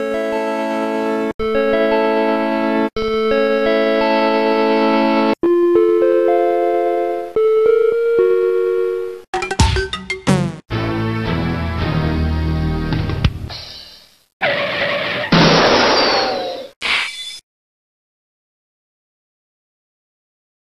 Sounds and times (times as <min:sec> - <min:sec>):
Sound effect: 0:13.5 - 0:17.4.